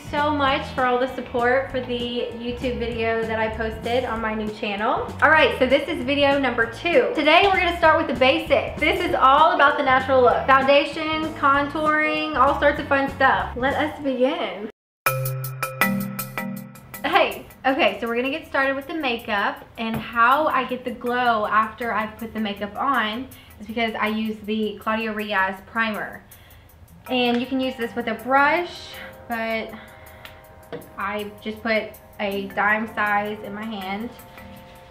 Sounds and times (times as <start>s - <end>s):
Music: 0.0s - 14.3s, 15.1s - 34.9s
Speech: 0.0s - 14.7s, 17.0s - 26.2s, 27.1s - 29.7s, 31.0s - 34.2s.